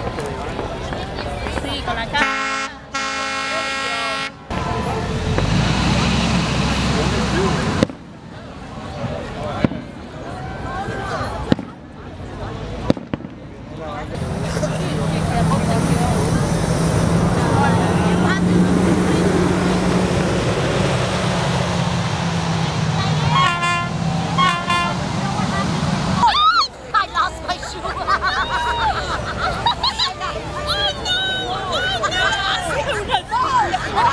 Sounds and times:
Boat, Water vehicle: 0.0 - 34.1.

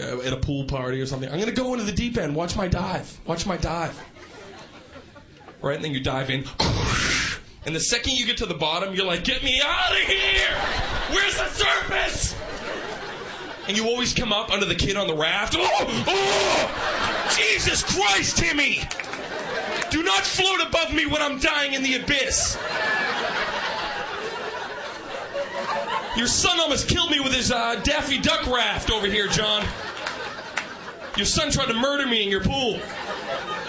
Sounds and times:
Speech: 0.0 - 4.1, 5.6 - 12.4, 13.7 - 18.9, 19.8 - 22.6, 26.2 - 29.8, 31.1 - 32.9.

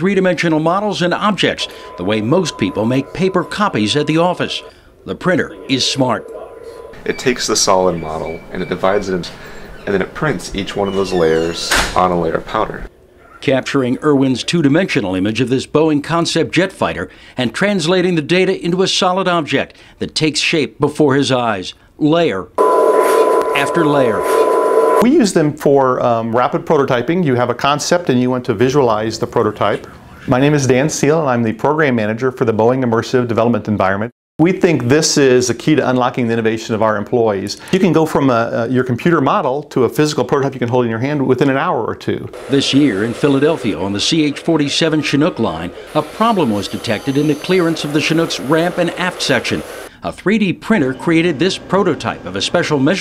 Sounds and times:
Speech: 0.0 - 22.6, 23.6 - 24.3, 25.0 - 53.0.

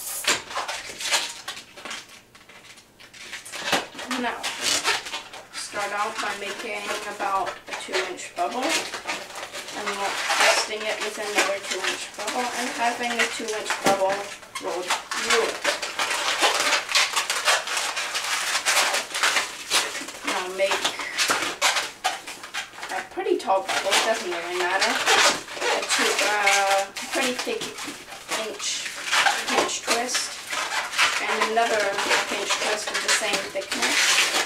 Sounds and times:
Speech: 4.0 - 4.5, 5.6 - 8.9, 9.8 - 15.6, 20.2 - 21.0, 22.9 - 30.4, 31.2 - 34.1.

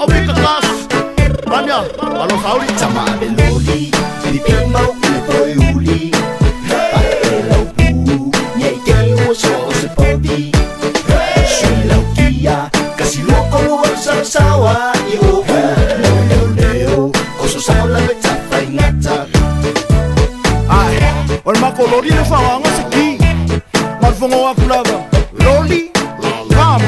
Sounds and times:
Afrobeat: 0.0 - 26.8.

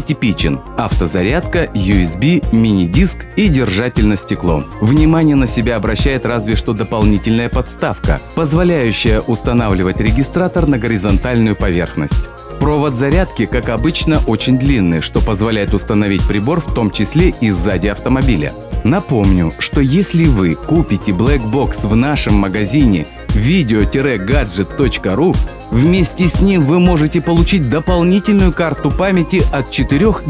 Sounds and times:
Music: 0.0 - 30.3
Speech: 0.0 - 30.3.

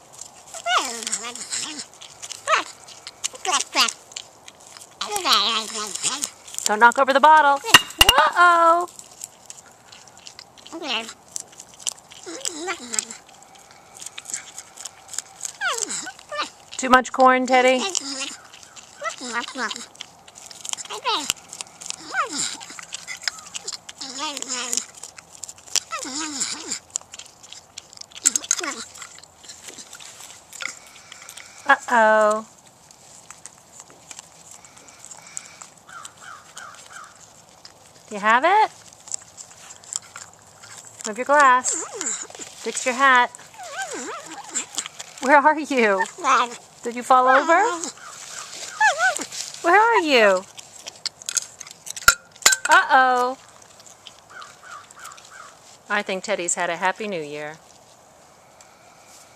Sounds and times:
Animal: 0.0 - 59.3
Outside, rural or natural: 0.0 - 59.3
Speech: 6.7 - 8.9, 16.8 - 18.0, 38.1 - 38.7, 41.1 - 41.8, 42.7 - 43.3, 45.2 - 47.9, 49.6 - 50.5, 52.7 - 53.4, 55.9 - 57.6.

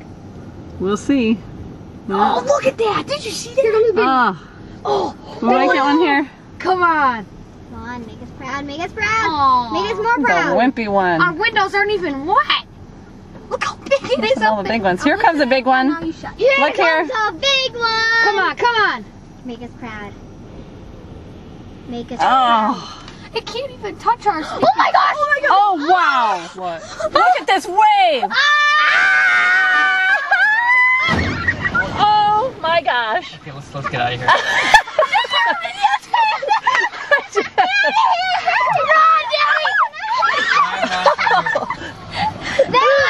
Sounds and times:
Screaming: 28.3 - 32.4, 37.8 - 40.9.

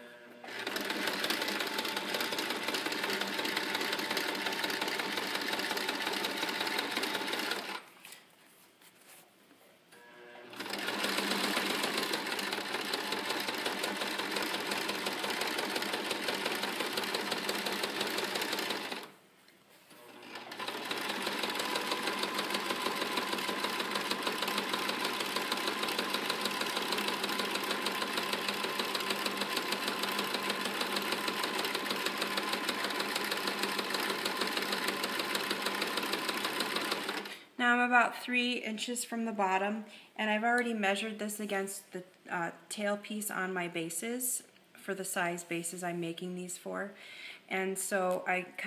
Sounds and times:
Sewing machine: 0.0 - 7.9, 10.0 - 19.1, 20.0 - 37.4.

